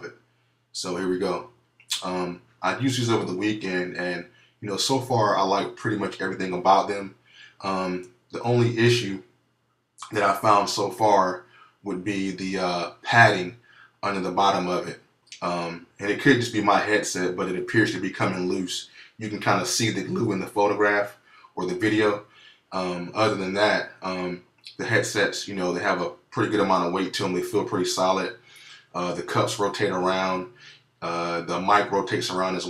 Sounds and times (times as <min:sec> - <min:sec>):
Speech: 0:00.8 - 0:09.2, 0:10.0 - 0:32.7.